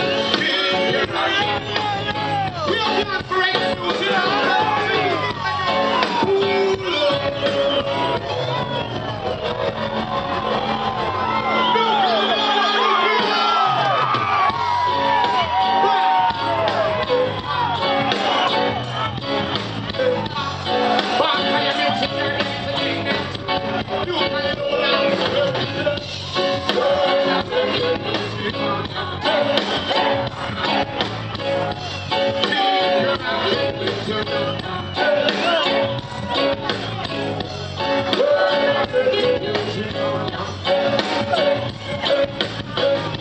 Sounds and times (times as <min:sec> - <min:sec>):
Blues: 0:00.0 - 0:43.2.